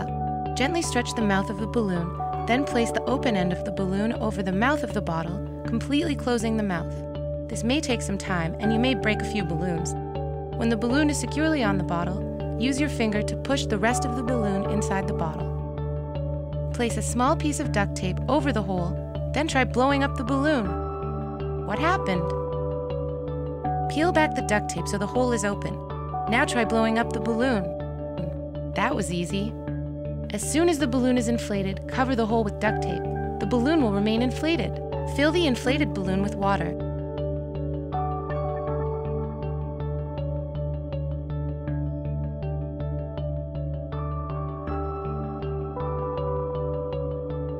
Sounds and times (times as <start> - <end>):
Speech: 0.0 - 10.0, 10.6 - 15.5, 16.8 - 20.8, 21.6 - 22.4, 23.9 - 29.6, 30.3 - 36.8
Music: 0.0 - 47.5.